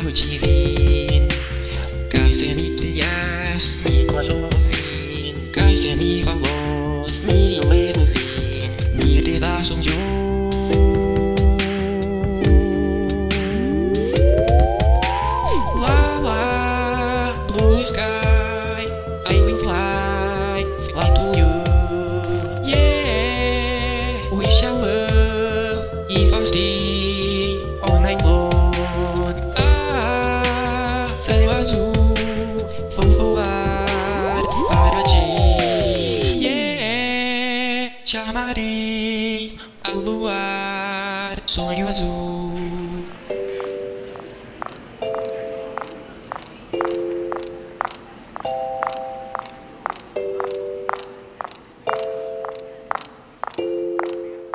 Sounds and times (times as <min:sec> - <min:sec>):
Music: 0:00.0 - 0:54.5
Speech: 0:33.0 - 0:38.7.